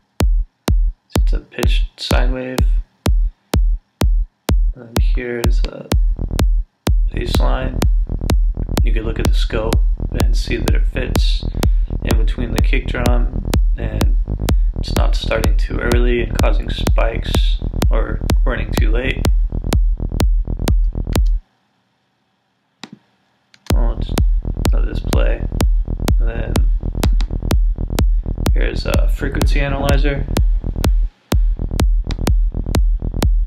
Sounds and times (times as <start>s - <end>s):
Music: 0.0s - 21.5s, 23.6s - 33.4s
Speech: 1.1s - 2.8s, 4.8s - 6.0s, 7.1s - 7.9s, 8.8s - 14.2s, 14.8s - 19.3s, 23.7s - 25.5s, 26.2s - 26.7s, 28.5s - 30.4s.